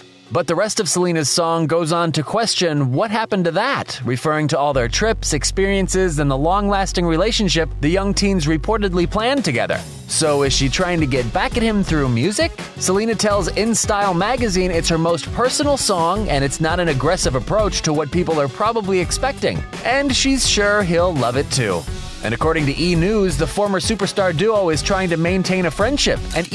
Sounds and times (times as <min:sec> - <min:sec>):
Music: 0:00.0 - 0:26.5
Speech: 0:00.3 - 0:26.5.